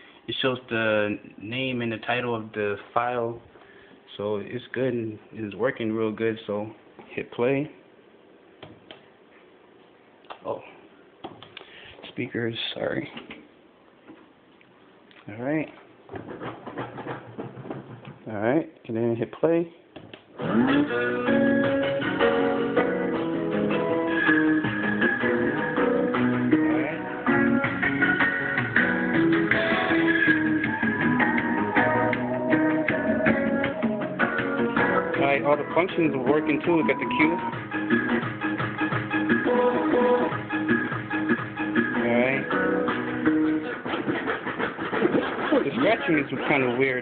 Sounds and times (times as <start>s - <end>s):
Speech: 0.3s - 3.5s, 4.1s - 7.8s, 10.4s - 10.8s, 12.0s - 13.3s, 15.2s - 15.8s, 18.2s - 19.8s, 35.2s - 37.5s, 42.0s - 42.5s, 45.5s - 47.0s
Electronic music: 20.4s - 43.9s.